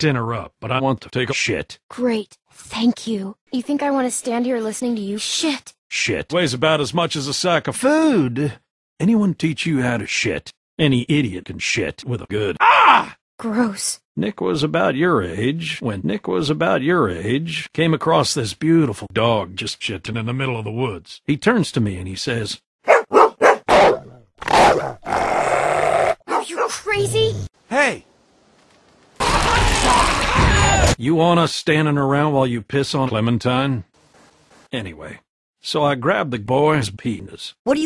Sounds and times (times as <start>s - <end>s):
Groan: 12.6s - 13.2s, 25.1s - 26.2s, 29.2s - 30.9s.